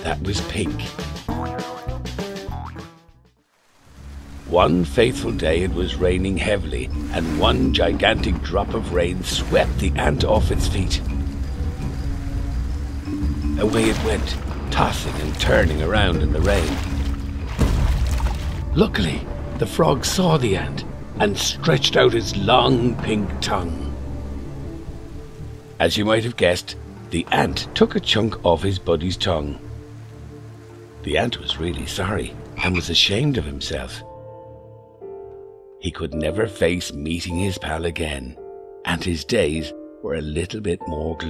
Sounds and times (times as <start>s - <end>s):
Speech: 0.0s - 1.0s, 4.5s - 11.1s, 13.6s - 16.8s, 18.8s - 23.9s, 25.8s - 29.6s, 31.0s - 34.1s, 35.8s - 41.2s
Music: 0.0s - 41.2s.